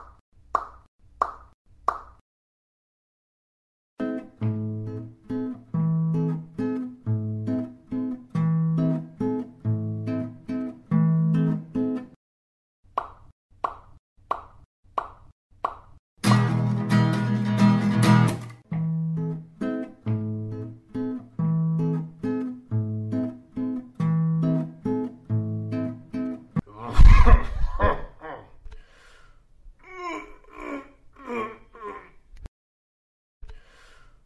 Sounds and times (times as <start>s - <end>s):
Music: 4.0s - 12.2s, 16.2s - 26.6s.